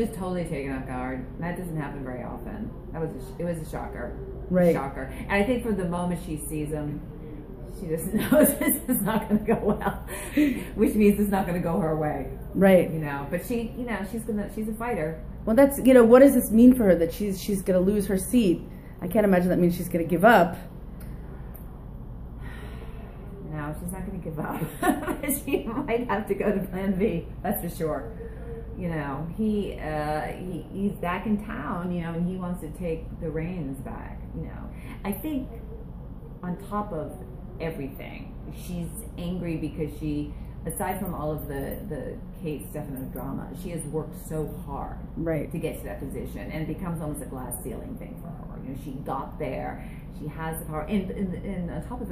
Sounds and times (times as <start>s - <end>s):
Speech: 0.0s - 20.7s, 23.4s - 52.1s.